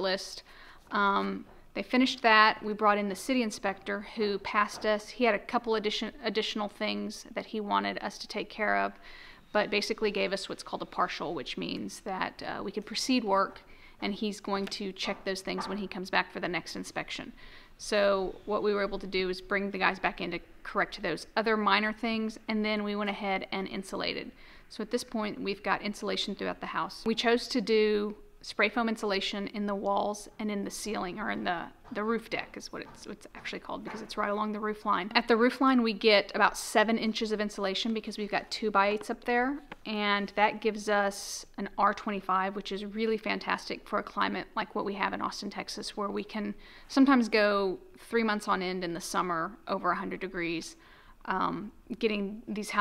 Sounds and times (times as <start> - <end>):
Speech: 0.0 - 52.8.